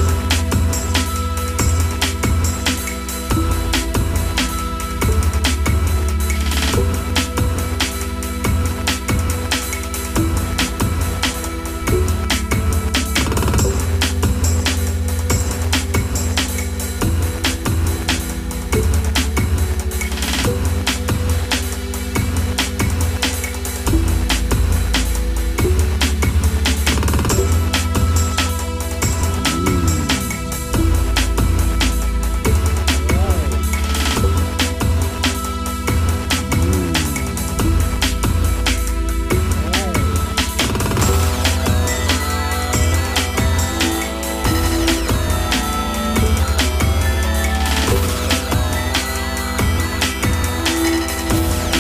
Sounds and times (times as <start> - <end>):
Drum and bass: 0.0 - 51.8.